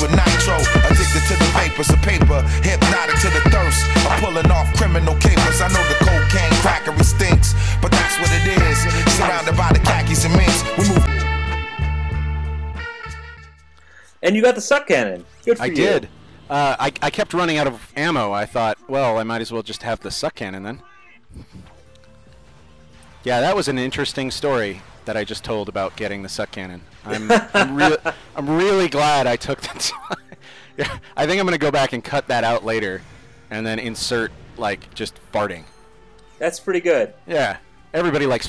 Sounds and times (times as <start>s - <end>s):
Music: 0.0s - 38.4s
Speech: 14.2s - 21.6s, 23.3s - 30.2s, 30.8s - 35.7s, 36.4s - 38.4s.